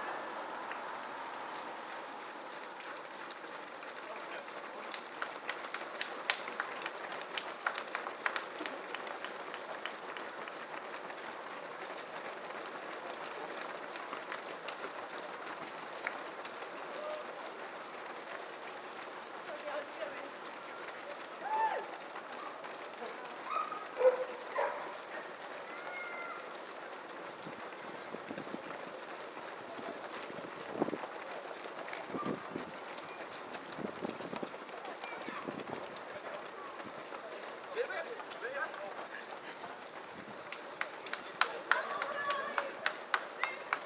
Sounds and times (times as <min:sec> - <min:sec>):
Outside, urban or manmade: 0:00.0 - 0:43.8
Run: 0:00.0 - 0:43.8
Speech: 0:04.0 - 0:05.0, 0:19.4 - 0:26.5, 0:34.7 - 0:43.8.